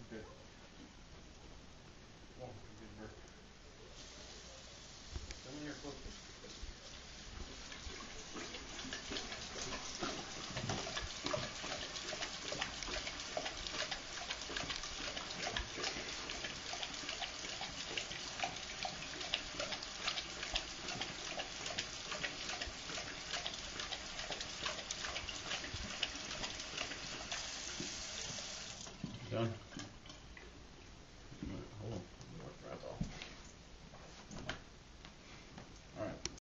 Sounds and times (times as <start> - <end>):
Water tap, faucet: 4.0 - 29.6
Sink (filling or washing): 4.0 - 29.8
Water: 5.5 - 30.7.